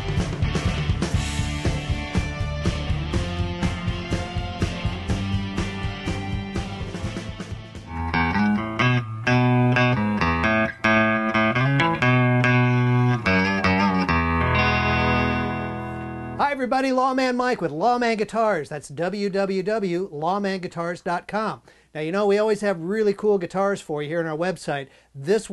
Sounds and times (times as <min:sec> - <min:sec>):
Strum: 0:00.0 - 0:16.6
Speech: 0:16.4 - 0:25.5.